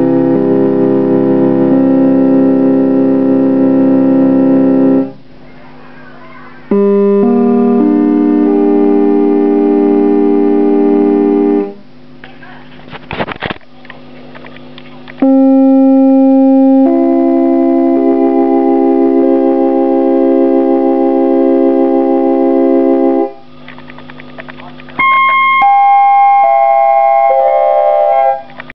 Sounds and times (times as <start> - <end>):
Sampler: 0.0 - 5.3, 6.7 - 12.0, 15.2 - 28.7.